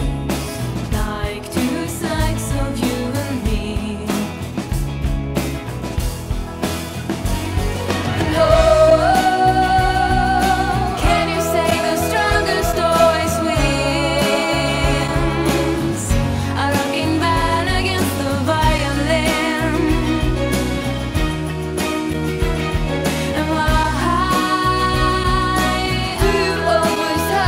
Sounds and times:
Music: 0.0 - 27.4.

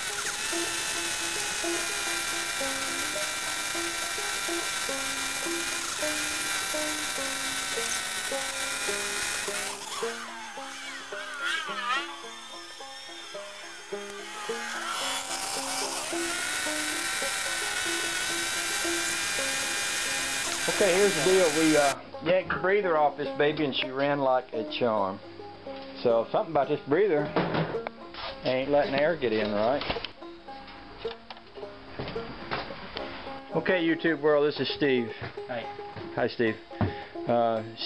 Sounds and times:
Music: 0.0 - 37.8.

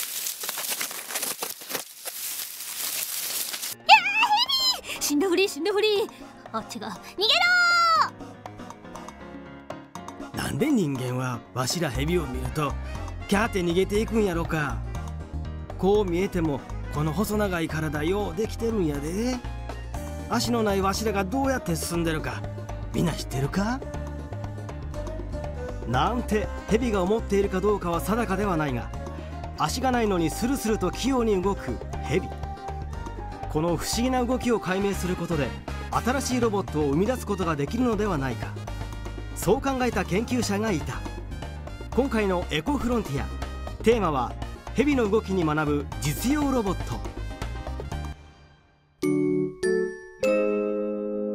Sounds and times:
Music: 3.3 - 51.3
Speech: 10.4 - 12.7, 15.8 - 19.4, 23.0 - 23.8, 25.9 - 28.9, 29.6 - 32.3, 33.6 - 38.6, 39.4 - 41.0, 42.0 - 47.0.

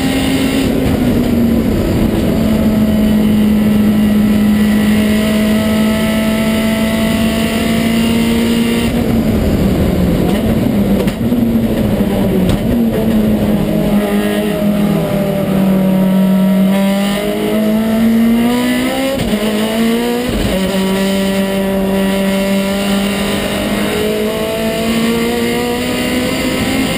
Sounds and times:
Car: 0.0 - 26.9.

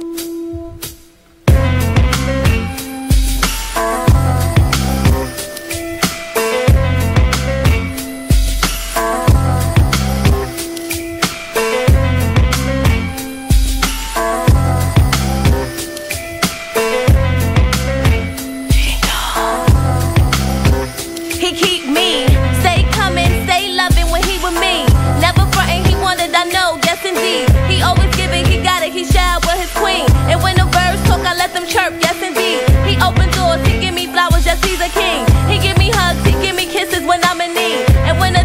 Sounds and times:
Music: 0.0 - 38.4.

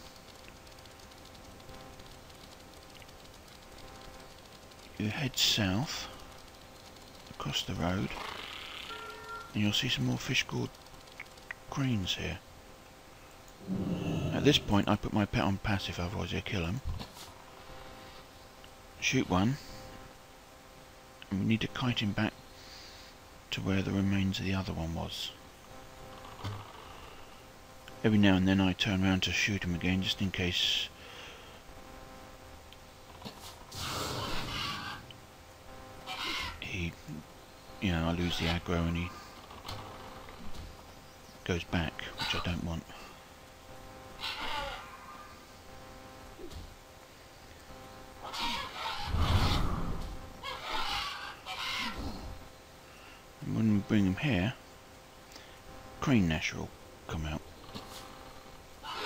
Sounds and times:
Speech: 5.0 - 6.1, 7.4 - 8.2, 9.6 - 10.7, 11.7 - 12.4, 14.0 - 16.9, 21.3 - 22.4, 23.5 - 25.4, 28.0 - 30.9, 37.8 - 39.2, 41.4 - 43.0, 53.4 - 54.6, 56.0 - 57.5.

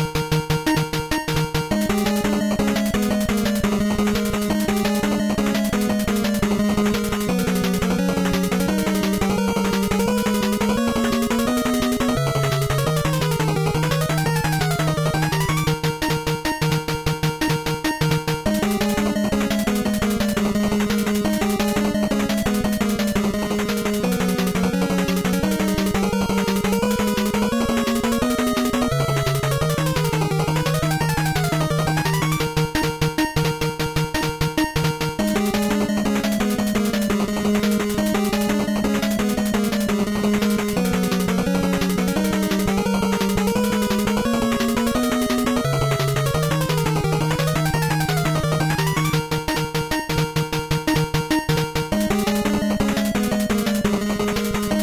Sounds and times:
Music: 0.0 - 54.8.

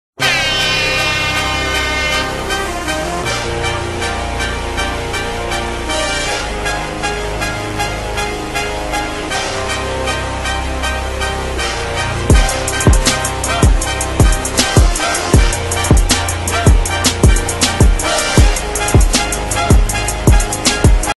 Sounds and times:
Music: 0.2 - 21.1.

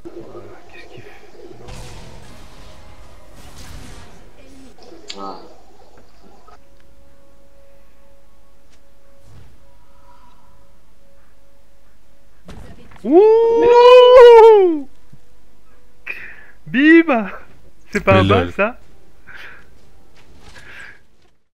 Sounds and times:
Speech: 18.0 - 18.8.

